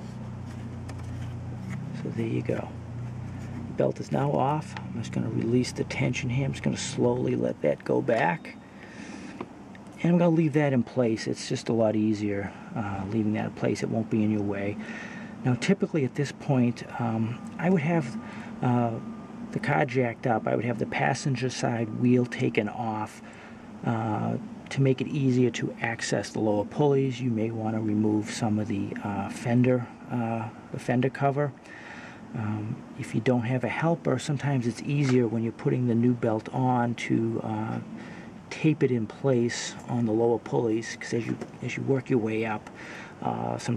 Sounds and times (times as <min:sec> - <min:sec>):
Vehicle: 0:00.0 - 0:43.7.